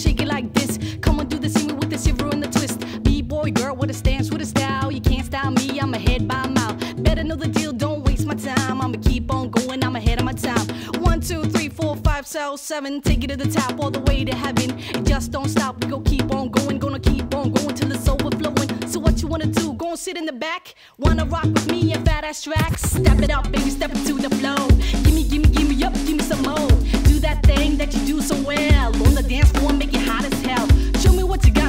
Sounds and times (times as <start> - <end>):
Music: 0.0 - 31.6.